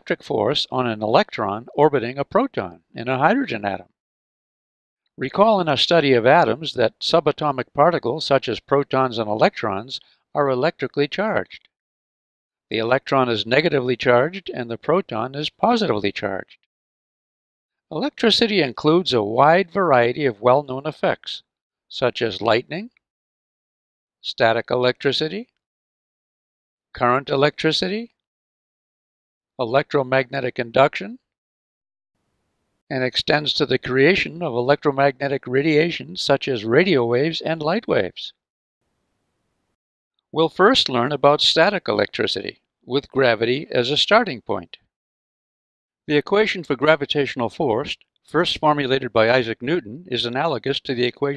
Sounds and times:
Speech: 0:00.0 - 0:04.0, 0:05.2 - 0:11.7, 0:12.7 - 0:16.6, 0:17.9 - 0:23.0, 0:24.2 - 0:25.6, 0:27.0 - 0:28.2, 0:29.6 - 0:31.3, 0:32.9 - 0:38.4, 0:40.4 - 0:44.9, 0:46.1 - 0:51.3.

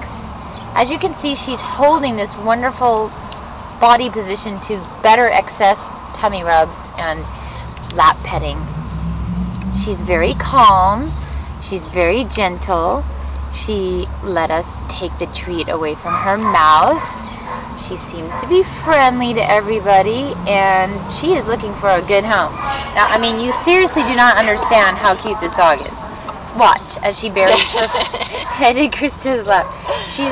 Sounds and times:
Speech: 0:00.8 - 0:03.1, 0:03.8 - 0:07.3, 0:09.8 - 0:13.0, 0:13.6 - 0:17.0, 0:17.8 - 0:26.0, 0:26.6 - 0:30.3.

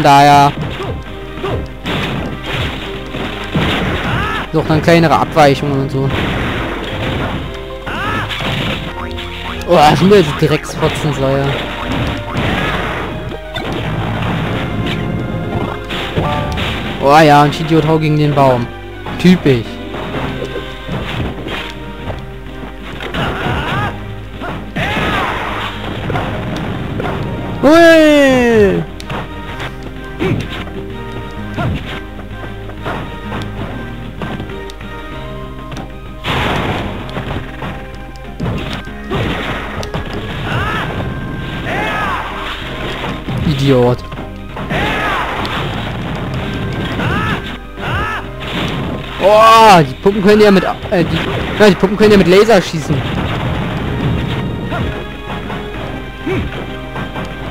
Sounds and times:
Whack, thwack: 0:00.5 - 0:04.6, 0:06.1 - 0:09.0, 0:10.8 - 0:17.0, 0:19.9 - 0:22.2, 0:22.9 - 0:30.8, 0:31.5 - 0:32.1, 0:32.8 - 0:34.6, 0:35.7 - 0:37.8, 0:38.4 - 0:49.8, 0:50.8 - 0:52.2, 0:52.9 - 0:57.5.

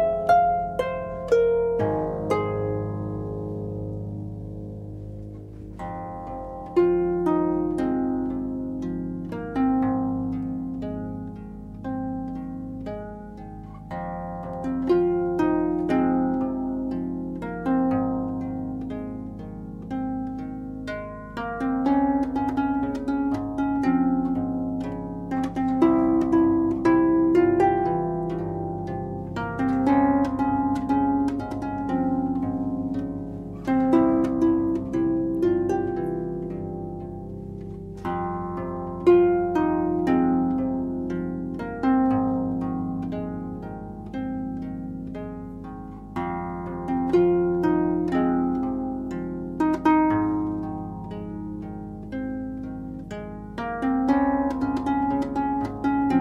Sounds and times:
Music: 0:00.0 - 0:56.2.

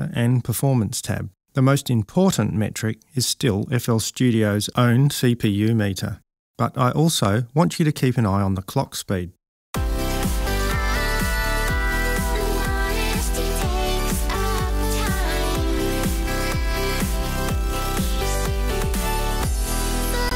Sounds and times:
Music: 0:09.8 - 0:20.3.

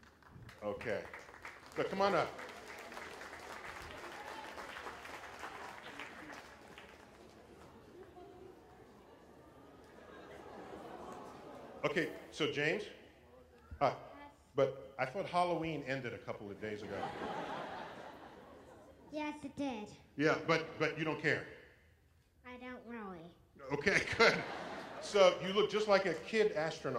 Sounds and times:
Applause: 0:00.0 - 0:09.0.

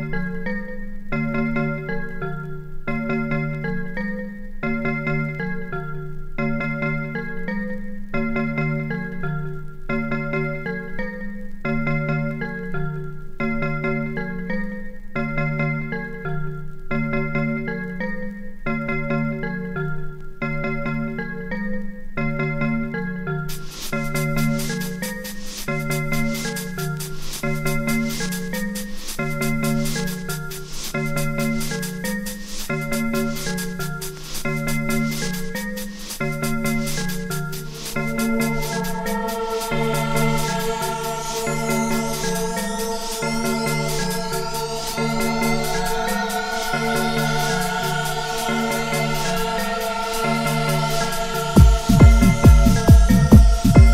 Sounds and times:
Glockenspiel: 0:00.0 - 0:53.9.

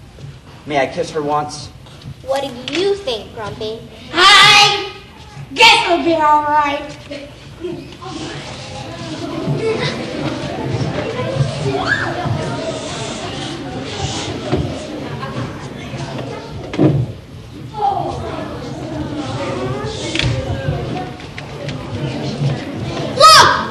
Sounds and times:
Thump, thud: 0:16.7 - 0:17.1.

